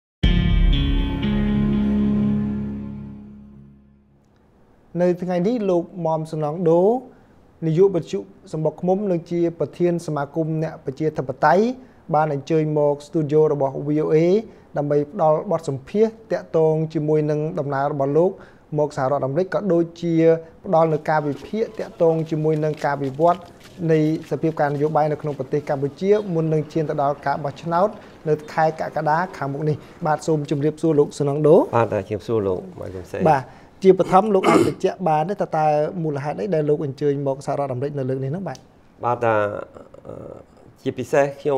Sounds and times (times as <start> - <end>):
Speech: 4.9 - 41.5.